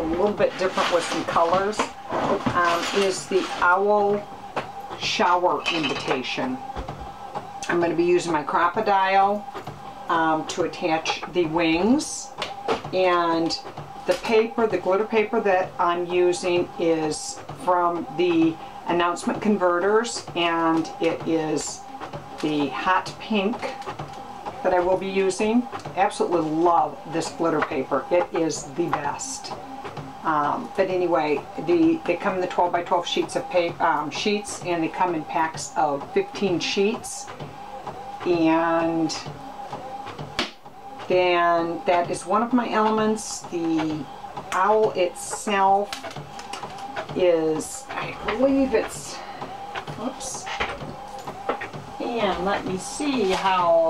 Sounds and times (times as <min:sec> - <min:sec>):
Speech: 0:00.0 - 0:04.3, 0:05.0 - 0:06.7, 0:07.6 - 0:09.5, 0:10.1 - 0:12.3, 0:12.9 - 0:23.8, 0:24.6 - 0:29.6, 0:30.2 - 0:37.4, 0:38.2 - 0:39.3, 0:41.1 - 0:45.9, 0:47.2 - 0:49.2, 0:49.9 - 0:50.6, 0:52.0 - 0:53.8.